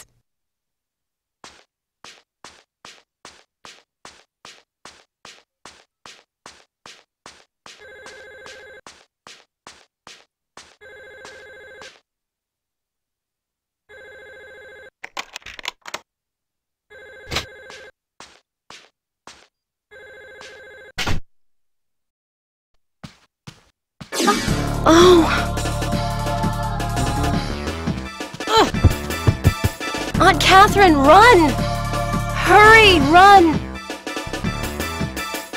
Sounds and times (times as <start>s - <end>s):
Music: 24.2s - 35.5s.